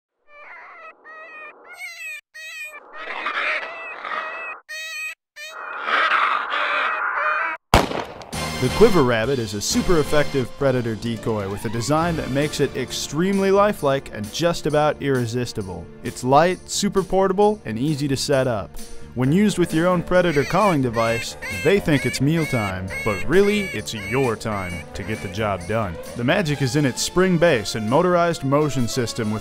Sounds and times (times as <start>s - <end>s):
Animal: 0.2s - 7.6s, 19.3s - 27.0s
Music: 8.4s - 29.4s
Speech: 8.6s - 29.4s.